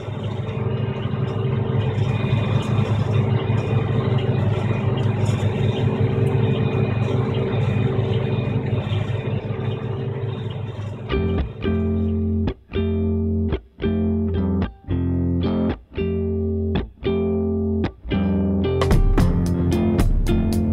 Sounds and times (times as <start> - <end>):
Vehicle: 0.0 - 16.0
Distortion: 0.0 - 20.7
Outside, urban or manmade: 0.0 - 20.7
Music: 11.0 - 20.7.